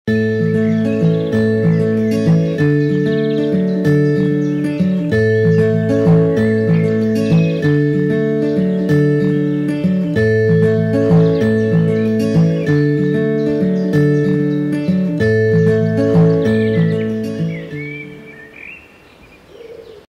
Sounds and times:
Chirp, tweet: 0:00.3 - 0:20.0.

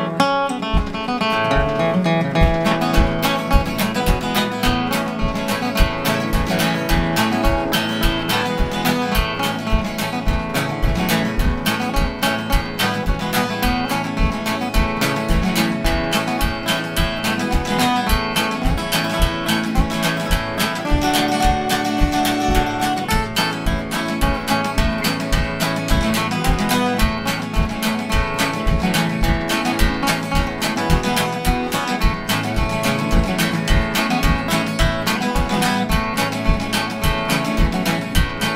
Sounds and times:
Music: 0:00.0 - 0:38.5.

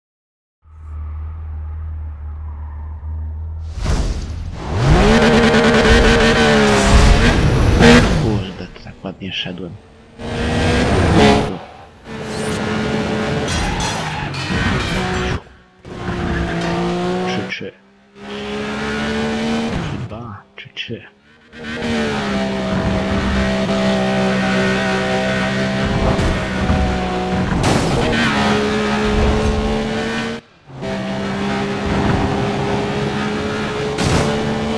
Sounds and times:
Speech: 0:08.2 - 0:09.8, 0:17.2 - 0:17.8, 0:20.1 - 0:21.2.

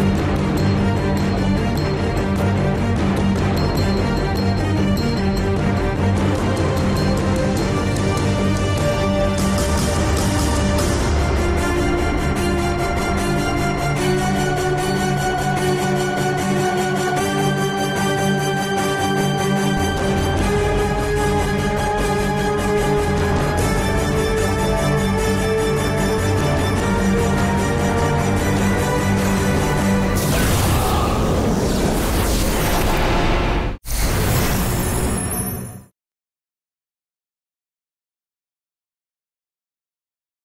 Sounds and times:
Theme music: 0:00.0 - 0:33.2.

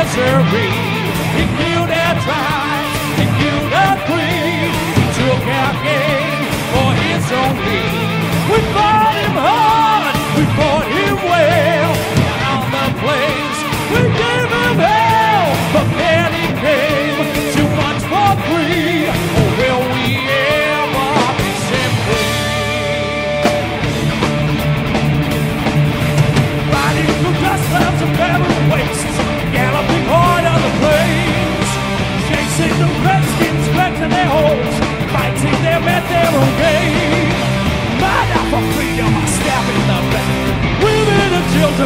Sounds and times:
Music: 0:00.0 - 0:41.8.

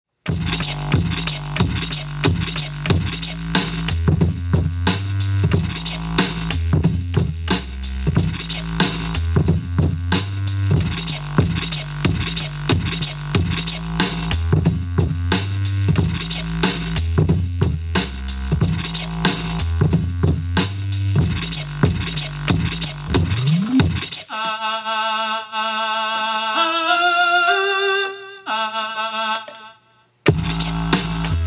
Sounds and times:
Inside, small room: 0:00.1 - 0:31.4.

